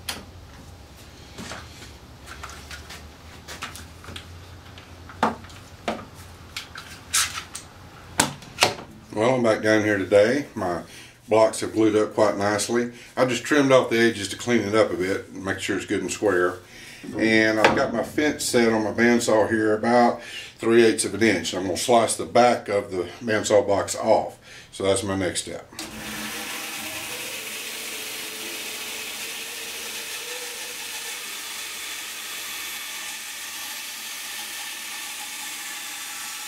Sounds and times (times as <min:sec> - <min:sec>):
Sawing: 0:25.8 - 0:36.4.